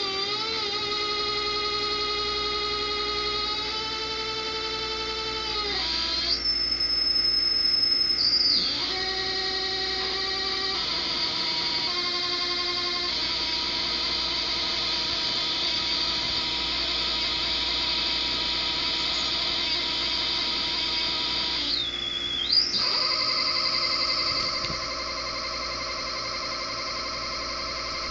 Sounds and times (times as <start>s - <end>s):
Inside, small room: 0.0s - 28.1s.